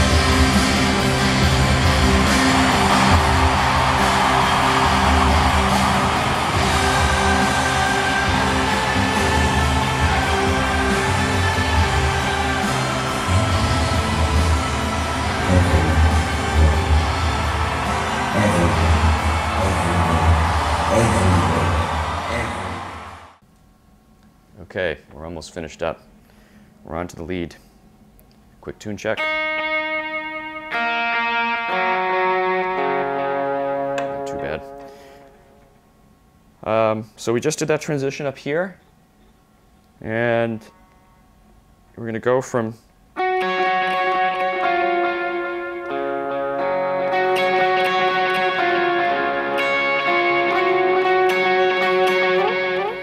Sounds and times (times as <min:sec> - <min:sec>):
Guitar: 0:00.0 - 0:23.3, 0:28.2 - 0:36.9, 0:43.1 - 0:53.0
Speech: 0:18.4 - 0:18.9, 0:19.6 - 0:22.8, 0:24.6 - 0:26.0, 0:26.8 - 0:27.7, 0:28.6 - 0:29.2, 0:34.3 - 0:34.7, 0:36.6 - 0:38.8, 0:40.0 - 0:40.7, 0:42.0 - 0:42.9.